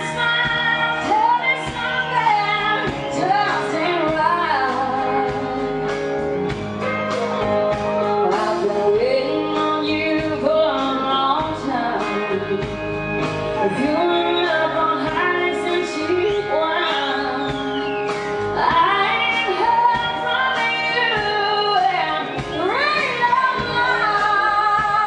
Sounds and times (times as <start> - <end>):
Female singing: 0.0 - 5.7, 7.9 - 12.7, 13.6 - 17.8, 18.6 - 25.0
Music: 0.0 - 25.0.